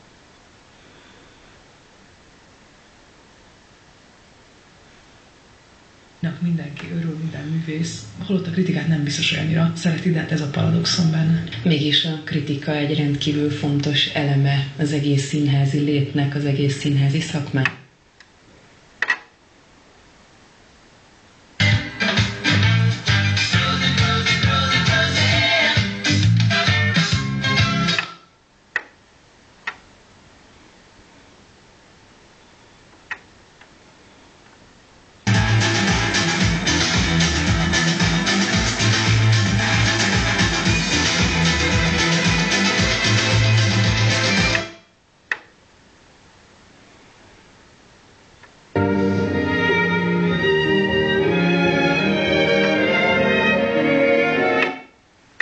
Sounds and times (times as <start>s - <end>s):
Music: 21.6s - 28.3s, 35.3s - 44.9s, 48.8s - 55.0s.